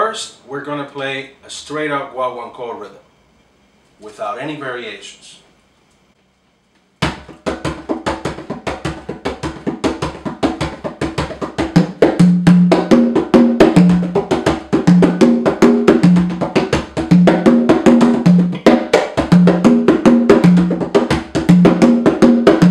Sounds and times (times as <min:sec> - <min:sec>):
Drum: 0:07.0 - 0:22.7.